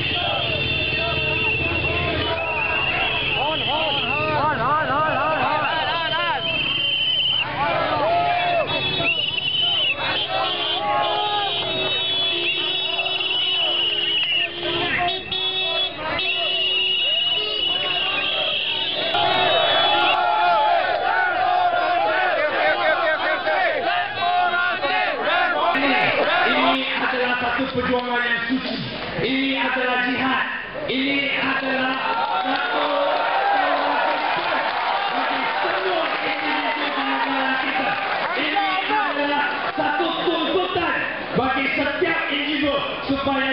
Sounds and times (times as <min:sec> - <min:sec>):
Speech: 0:25.6 - 0:33.2, 0:35.1 - 0:43.5.